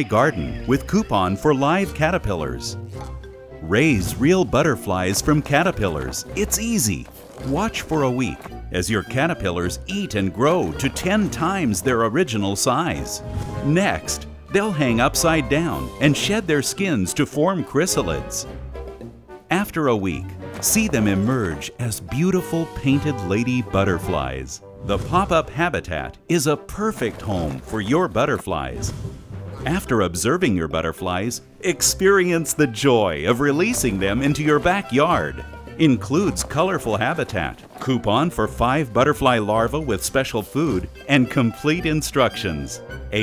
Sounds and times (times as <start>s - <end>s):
Speech: 0.0s - 2.8s, 3.6s - 18.5s, 19.5s - 28.9s, 29.6s - 43.2s.